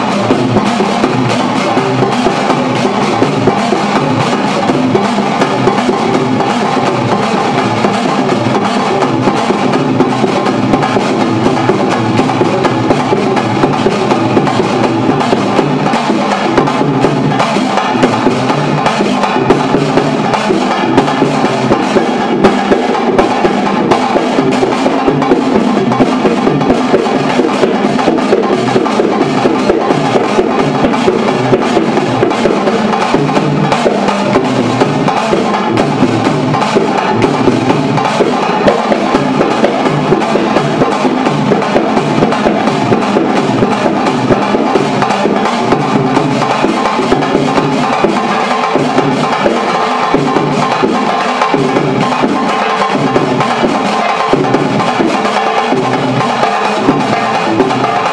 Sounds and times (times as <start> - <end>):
Music: 0.0 - 58.1.